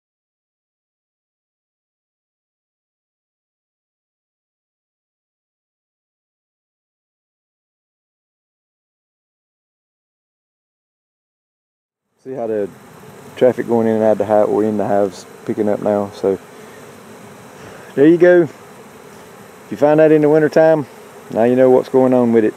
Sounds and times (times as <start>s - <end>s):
Bee, wasp, etc.: 12.1s - 22.5s
Fly, housefly: 12.1s - 22.5s.